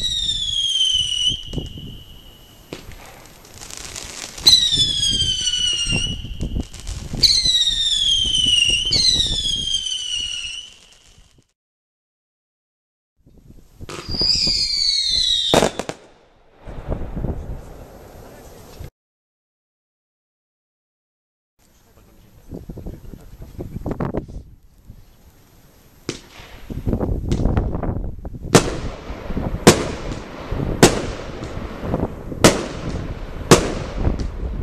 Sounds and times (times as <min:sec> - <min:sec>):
Fireworks: 0:00.0 - 0:11.5, 0:13.8 - 0:18.9, 0:26.0 - 0:34.6
Speech: 0:17.5 - 0:18.9, 0:21.7 - 0:24.4.